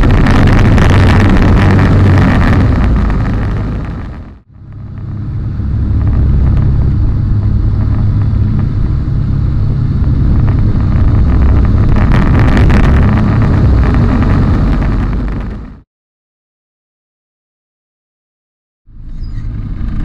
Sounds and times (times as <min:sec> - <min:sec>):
Aircraft: 0:00.0 - 0:15.8, 0:18.9 - 0:20.0
Outside, rural or natural: 0:00.0 - 0:15.8, 0:18.9 - 0:20.0.